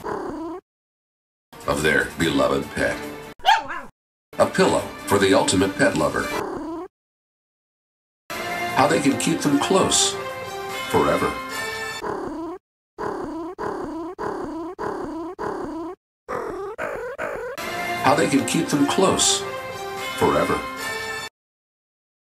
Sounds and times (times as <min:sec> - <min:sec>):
Animal: 0:00.0 - 0:00.6, 0:06.3 - 0:06.9, 0:12.0 - 0:17.6
Music: 0:01.6 - 0:03.4, 0:04.4 - 0:06.4, 0:08.3 - 0:12.0, 0:17.6 - 0:21.3
Speech: 0:01.7 - 0:03.1, 0:04.4 - 0:06.4, 0:08.8 - 0:10.2, 0:10.9 - 0:11.4, 0:18.0 - 0:19.5, 0:20.2 - 0:20.8.